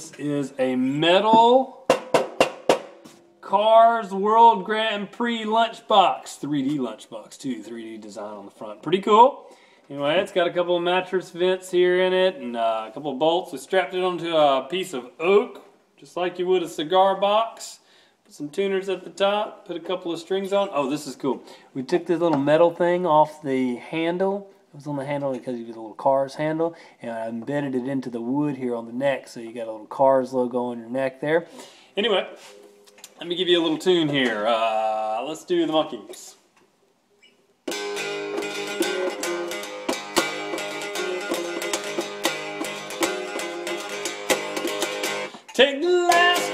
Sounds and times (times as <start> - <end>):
Speech: 0.0 - 1.8, 3.4 - 32.4, 33.2 - 36.5, 45.5 - 46.5.